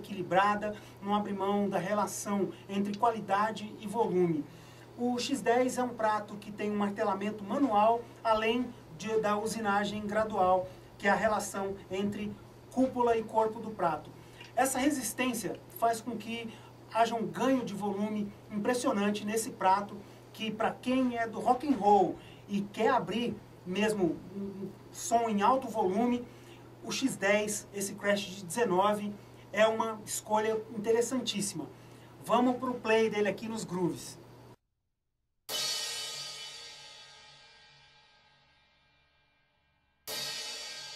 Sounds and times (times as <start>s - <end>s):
Speech: 0.0s - 34.2s
Inside, small room: 0.0s - 40.9s.